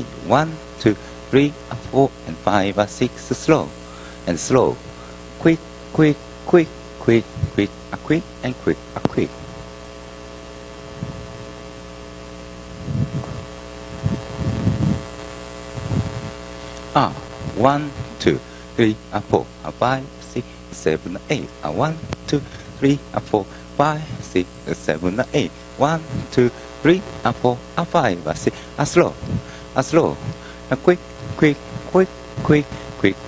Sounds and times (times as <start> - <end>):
Speech: 0.0 - 9.5, 16.9 - 33.2.